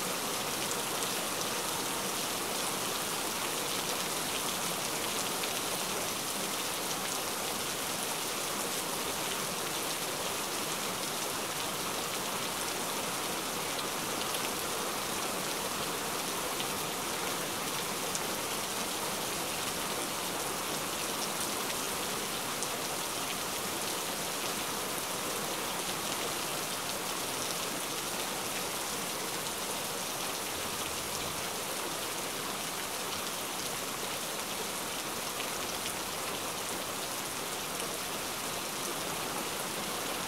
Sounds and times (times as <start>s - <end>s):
Rain on surface: 0.0s - 40.2s.